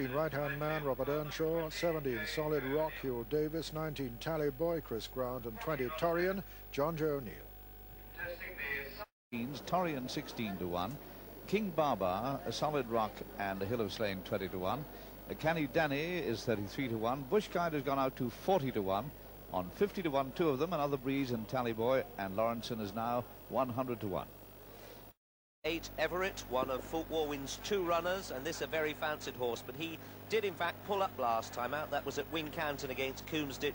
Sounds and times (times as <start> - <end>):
Speech: 0.0 - 7.5, 8.2 - 24.3, 25.7 - 33.7.